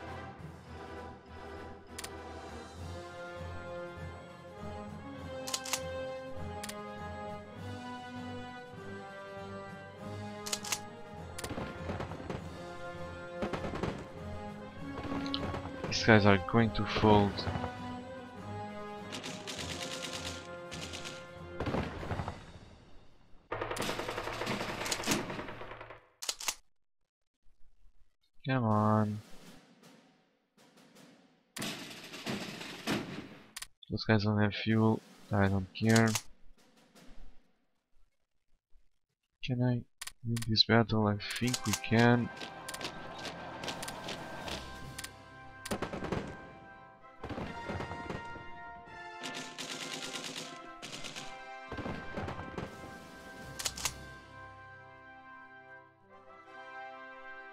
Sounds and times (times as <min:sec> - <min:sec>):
Machine gun: 0:13.4 - 0:14.2, 0:19.1 - 0:22.3, 0:23.5 - 0:26.0, 0:31.6 - 0:33.2, 0:45.7 - 0:46.4, 0:49.2 - 0:52.8
Speech: 0:15.9 - 0:17.5, 0:28.4 - 0:29.2, 0:33.9 - 0:36.2, 0:39.4 - 0:42.3.